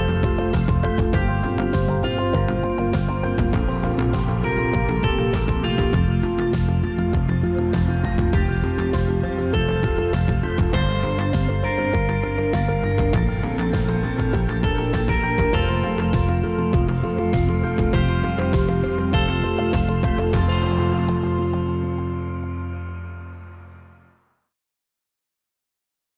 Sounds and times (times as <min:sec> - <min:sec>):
Music: 0:00.0 - 0:24.5.